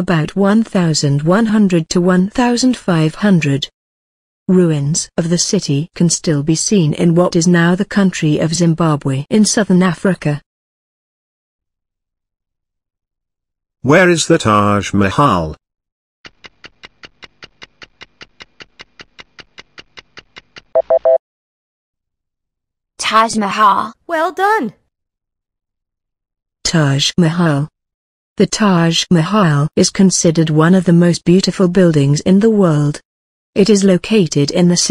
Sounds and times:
Speech: 0.0 - 3.7, 4.5 - 10.4, 13.8 - 15.6, 23.0 - 24.8, 26.7 - 27.7, 28.4 - 33.0, 33.6 - 34.9.

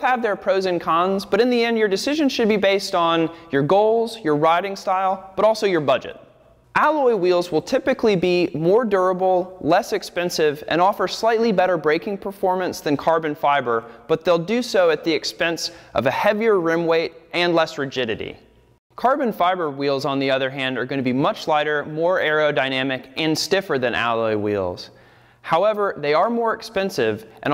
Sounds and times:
Speech: 0.0 - 6.2, 6.8 - 27.5.

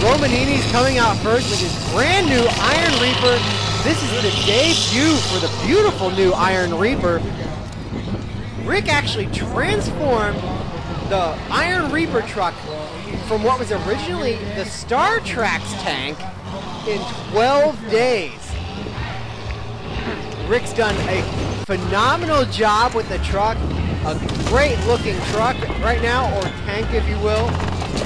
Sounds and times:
Speech: 0.0 - 7.7, 8.5 - 18.7, 20.4 - 28.0
Truck: 0.0 - 28.0.

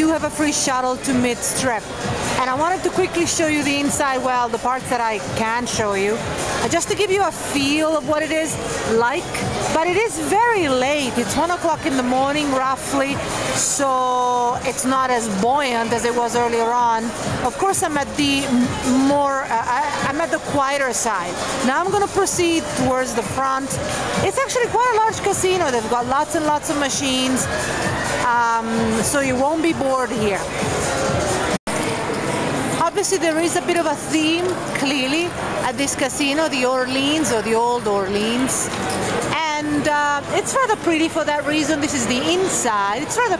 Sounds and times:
Speech: 0.0 - 27.5, 28.3 - 30.5, 32.8 - 38.7, 39.3 - 43.3
Music: 0.0 - 43.3.

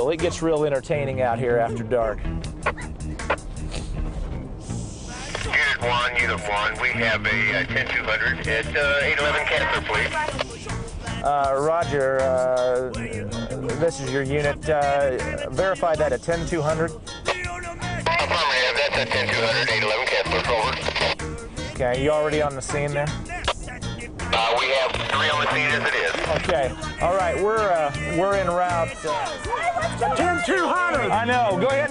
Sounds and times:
Speech: 0.0 - 2.2, 5.4 - 10.2, 11.2 - 16.9, 18.1 - 20.9, 21.8 - 23.2, 24.3 - 29.3, 30.0 - 31.9
Music: 0.0 - 31.9.

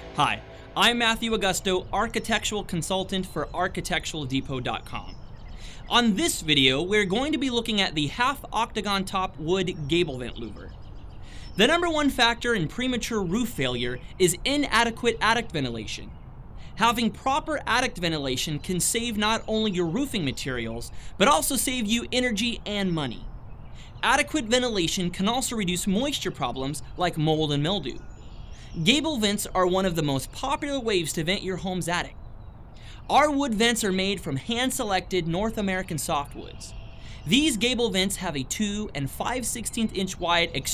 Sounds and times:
Speech: 0.2 - 5.2, 5.8 - 10.7, 11.5 - 16.1, 16.8 - 23.3, 24.0 - 28.0, 28.8 - 32.2, 33.0 - 40.7.

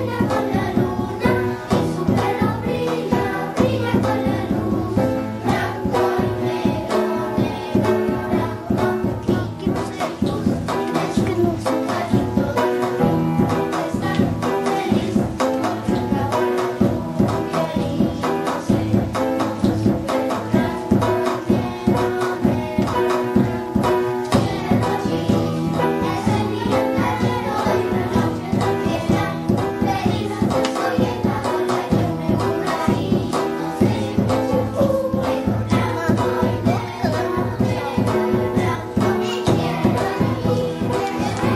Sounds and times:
Choir: 0.0 - 41.5.

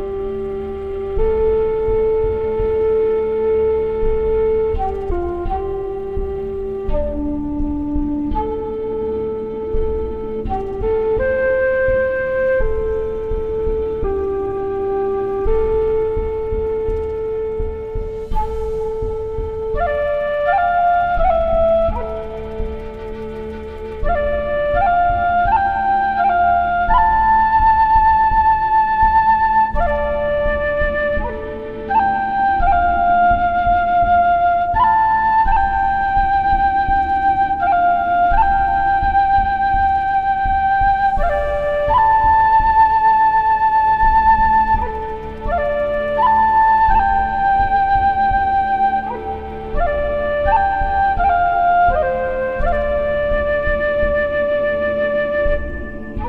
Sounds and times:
Flute: 0.0 - 56.2.

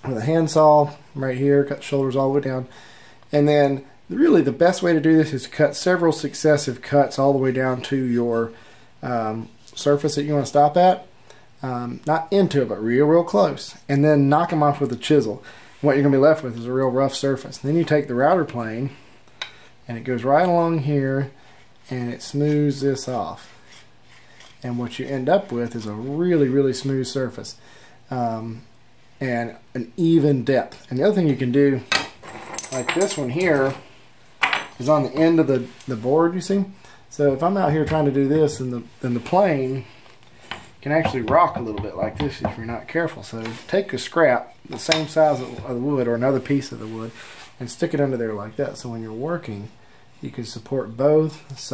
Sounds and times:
Rub: 23.3 - 25.5.

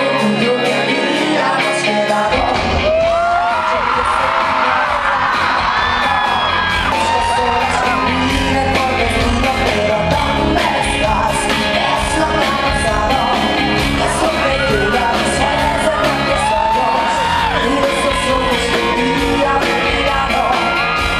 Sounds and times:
Music: 0.0 - 21.1.

